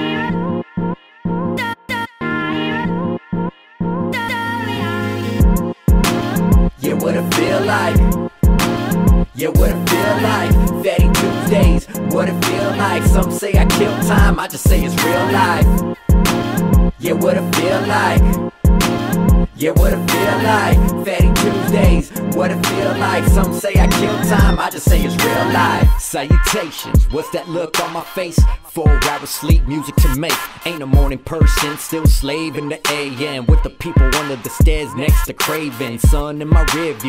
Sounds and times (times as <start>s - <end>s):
Pop music: 0.0s - 37.0s.